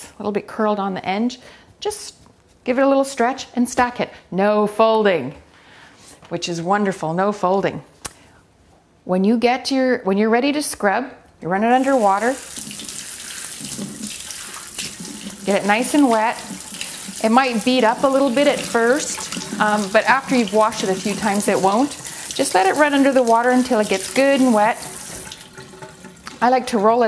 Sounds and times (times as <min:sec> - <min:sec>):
Sink (filling or washing): 0:11.7 - 0:27.0
Water: 0:11.7 - 0:27.0.